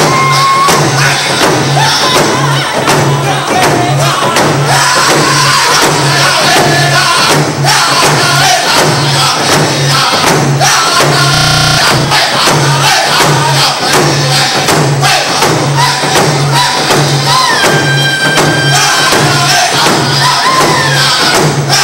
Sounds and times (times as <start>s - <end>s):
Drum: 0.0s - 21.8s.